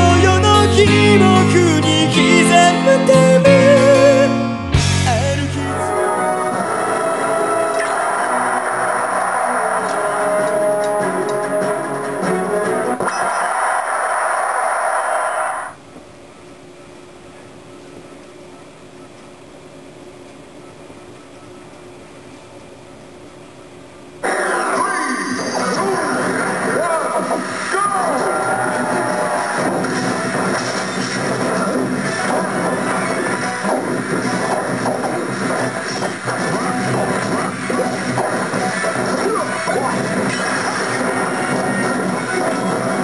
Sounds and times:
Music: 0.0 - 13.1, 25.3 - 43.0.

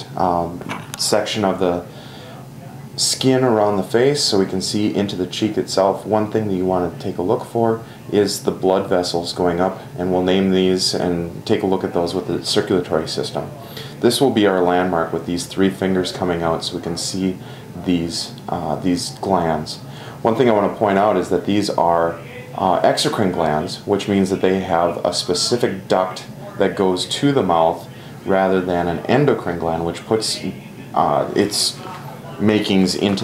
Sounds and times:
Speech: 0.0 - 33.2.

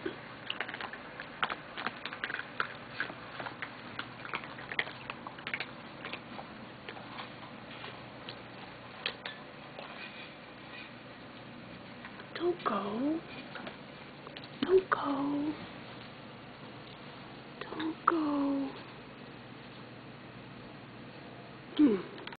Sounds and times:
Speech: 12.4 - 13.3, 14.6 - 15.6, 17.6 - 18.8, 21.8 - 22.2.

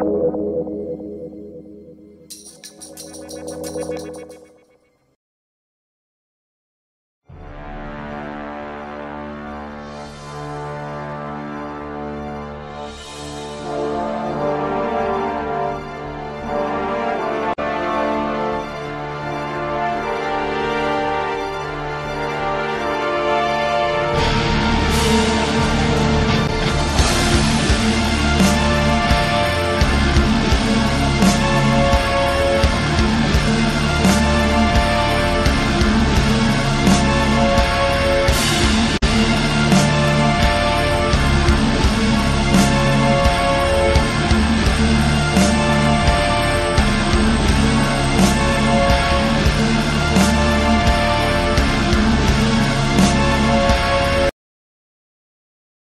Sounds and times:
Music: 0.0 - 5.2, 7.2 - 54.4.

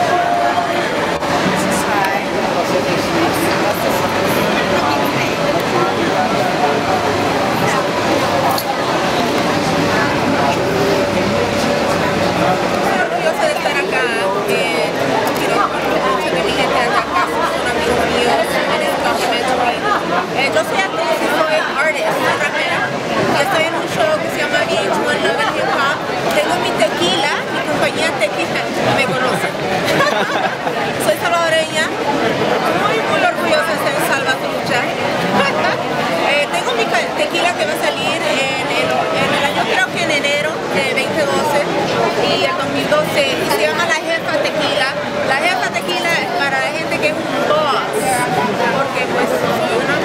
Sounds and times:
Speech: 0.0 - 50.0.

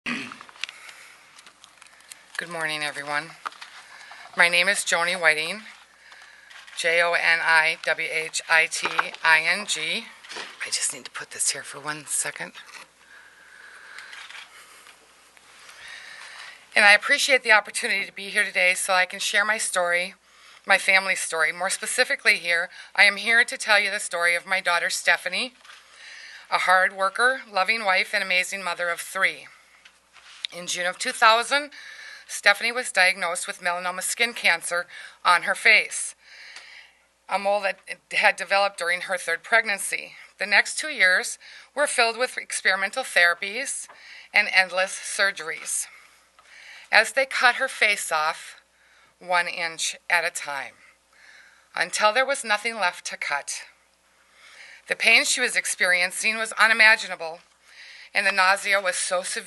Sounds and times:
Speech: 2.4 - 3.4, 4.4 - 5.7, 6.8 - 12.7, 16.8 - 25.6, 26.5 - 29.5, 30.5 - 31.7, 32.3 - 36.2, 37.3 - 45.9, 46.9 - 48.6, 49.2 - 50.7, 51.8 - 53.7, 54.9 - 57.4, 58.2 - 59.4.

